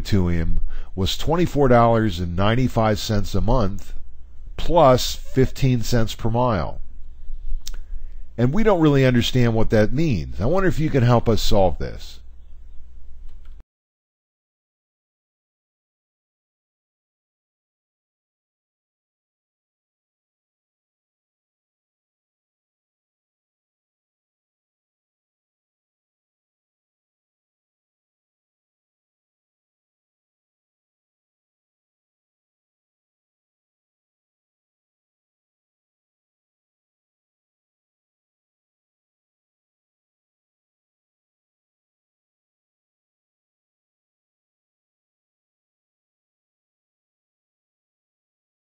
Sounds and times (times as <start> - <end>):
Speech: 0.0 - 4.0, 4.6 - 6.8, 8.4 - 12.2.